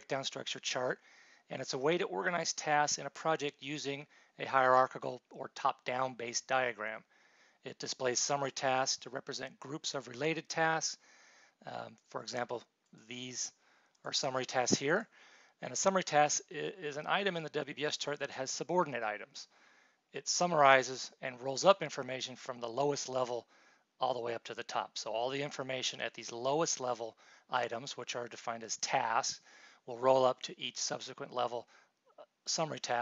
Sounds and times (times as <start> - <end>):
Speech: 0.0 - 7.1, 7.7 - 11.0, 11.6 - 19.5, 20.2 - 33.0.